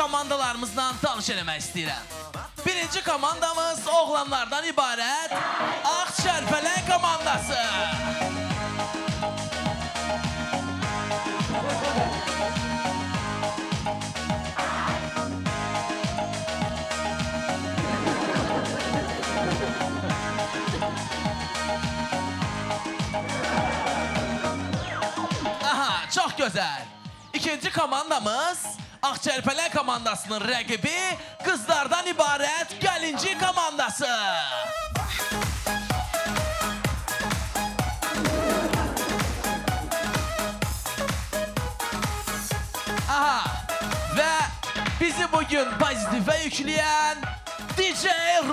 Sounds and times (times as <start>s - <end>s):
Music: 0.0s - 48.5s.